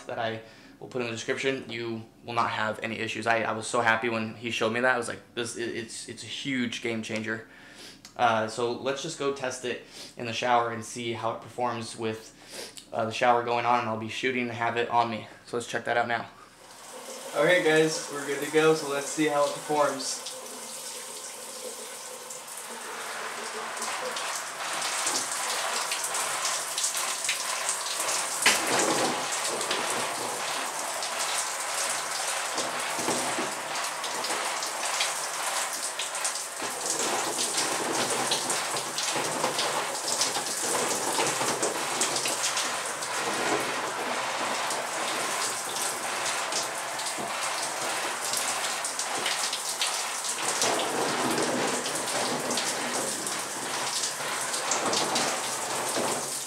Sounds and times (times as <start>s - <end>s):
Bathtub (filling or washing): 0.0s - 7.3s, 13.1s - 56.4s.